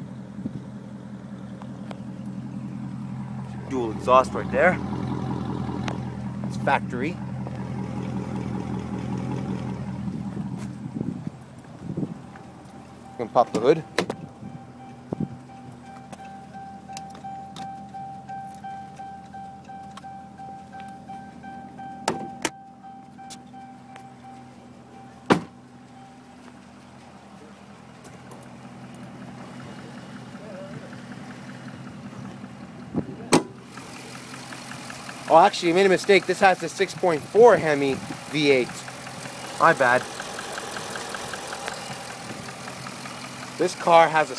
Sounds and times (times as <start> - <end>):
Car: 0.0 - 44.3
Outside, urban or manmade: 0.0 - 44.3
Speech: 3.6 - 4.8, 6.5 - 7.2, 13.2 - 13.9, 35.3 - 38.9, 39.6 - 40.0, 43.6 - 44.3.